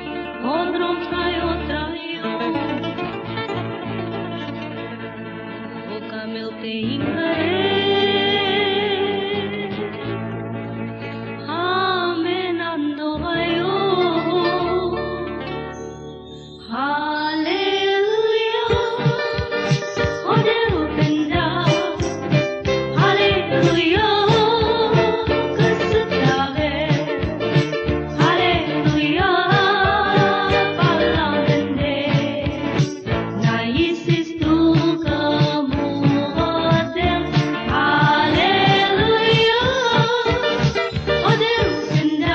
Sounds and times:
Gospel music: 0.0 - 42.3.

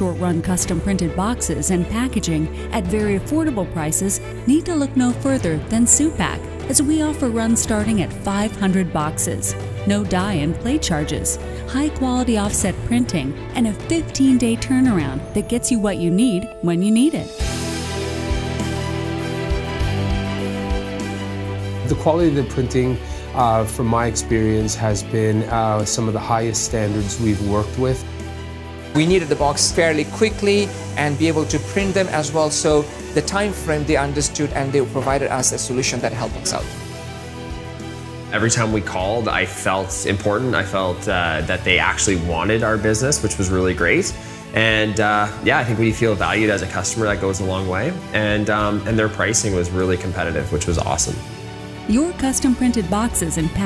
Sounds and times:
Music: 0.0 - 53.6
Speech: 9.9 - 17.3, 21.8 - 28.0, 29.0 - 36.7, 38.4 - 51.2.

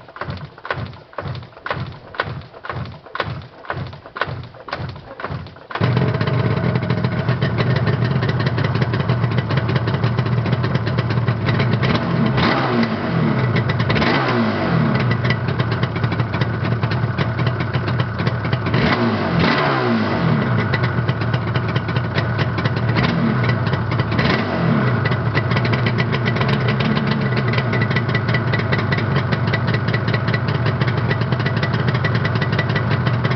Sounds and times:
Vehicle: 0.0 - 33.3
Accelerating, revving, vroom: 11.8 - 15.1, 18.7 - 20.6, 23.0 - 23.4, 24.1 - 25.0.

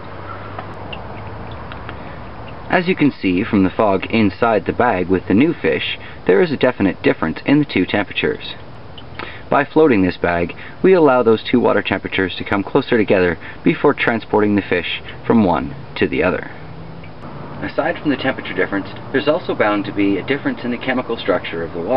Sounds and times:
Speech: 2.7 - 8.6, 9.5 - 16.6, 17.6 - 21.9.

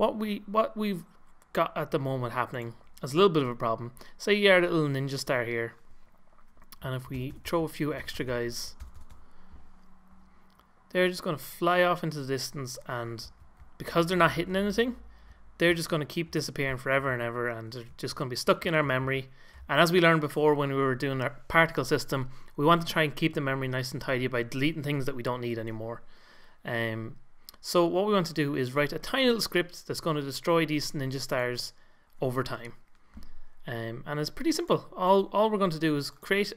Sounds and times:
Speech: 0.0 - 5.8, 6.8 - 8.8, 10.9 - 15.0, 15.6 - 32.8, 33.7 - 36.5.

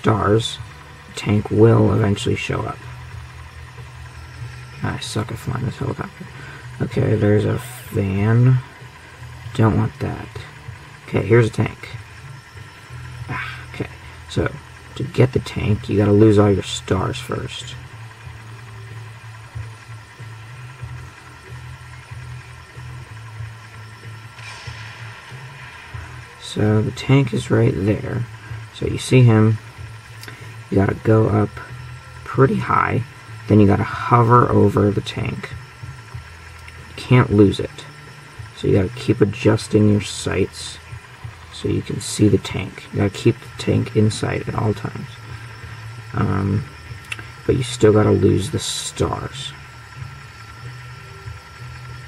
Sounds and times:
Speech: 0.0 - 2.9, 4.8 - 6.2, 6.8 - 8.7, 9.5 - 12.0, 13.3 - 17.8, 26.4 - 29.6, 30.7 - 35.6, 36.9 - 37.9, 38.6 - 40.9, 41.6 - 45.2, 46.1 - 46.7, 47.4 - 49.6.

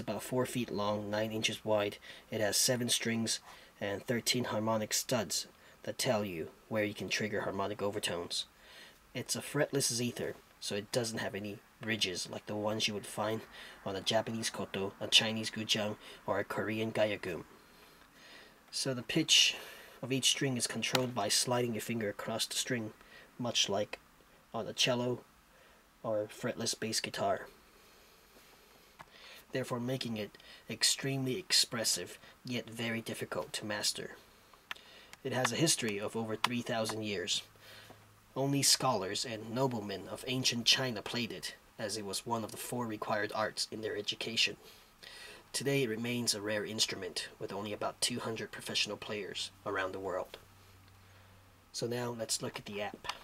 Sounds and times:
Speech: 0.0 - 8.5, 9.1 - 17.5, 18.7 - 25.3, 26.0 - 27.5, 29.5 - 34.2, 35.2 - 37.5, 38.4 - 44.6, 45.5 - 50.4, 51.7 - 53.2.

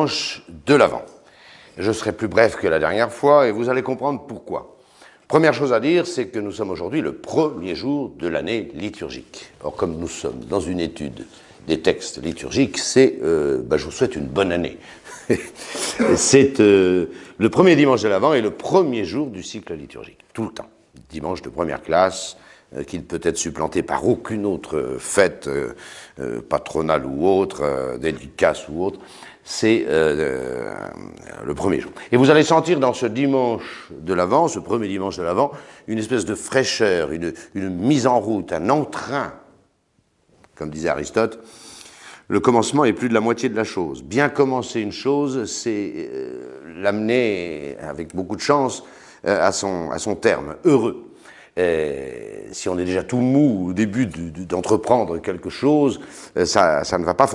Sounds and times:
Speech: 0.0 - 1.2, 1.8 - 39.6, 40.6 - 41.5, 42.3 - 57.3.

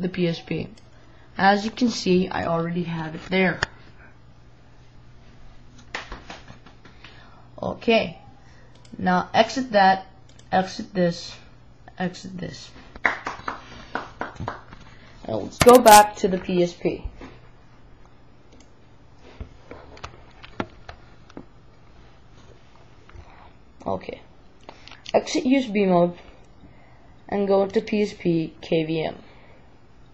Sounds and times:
Inside, small room: 0.0 - 30.1
Speech: 1.4 - 3.6, 15.3 - 17.1, 25.1 - 26.2, 27.3 - 29.2.

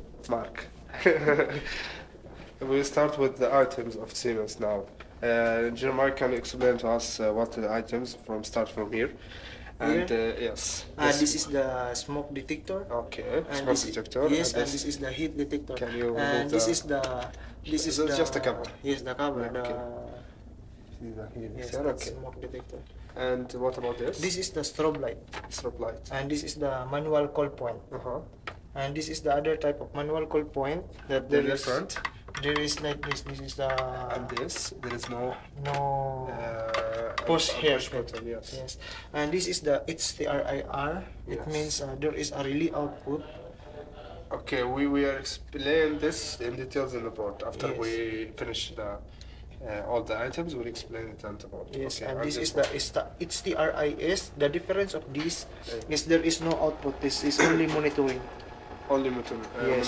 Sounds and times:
Speech: 21.0 - 49.0, 49.6 - 59.8.

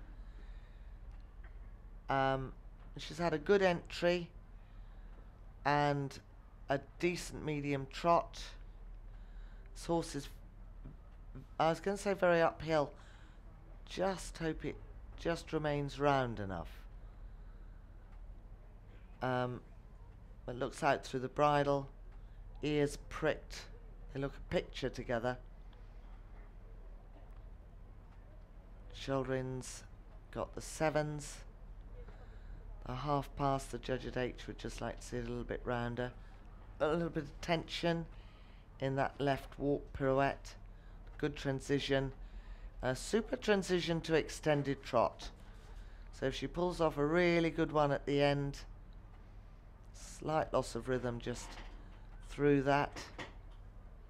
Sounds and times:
Speech: 2.0 - 4.4, 5.6 - 8.6, 9.8 - 13.0, 13.8 - 16.9, 19.2 - 19.8, 20.4 - 22.0, 22.6 - 25.5, 28.9 - 32.2, 32.8 - 36.2, 36.8 - 38.1, 38.8 - 40.6, 41.2 - 42.2, 42.8 - 45.4, 46.1 - 48.7, 50.0 - 53.2.

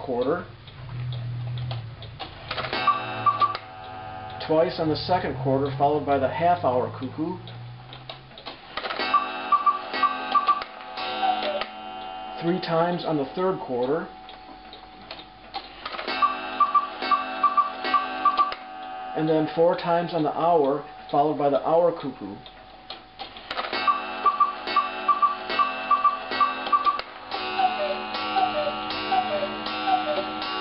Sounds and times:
Speech: 0.0 - 0.5, 4.4 - 7.4, 12.4 - 14.1, 19.2 - 22.4
Tick: 0.7 - 2.3.

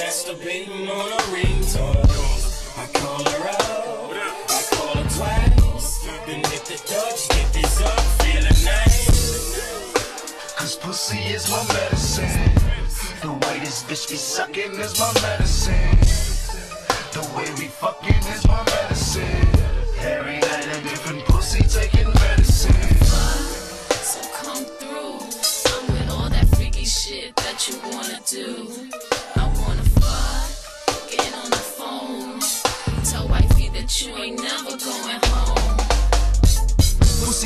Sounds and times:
Hip hop music: 0.0 - 37.4.

